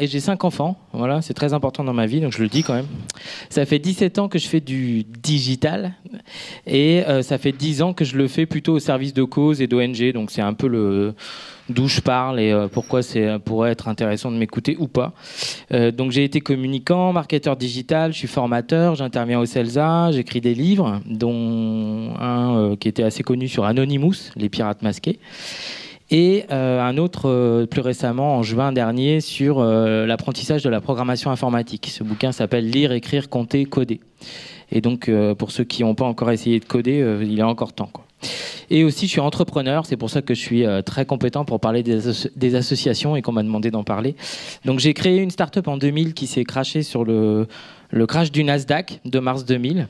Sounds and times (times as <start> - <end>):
Speech: 0.0 - 25.2, 26.1 - 34.1, 34.7 - 38.1, 38.7 - 49.8.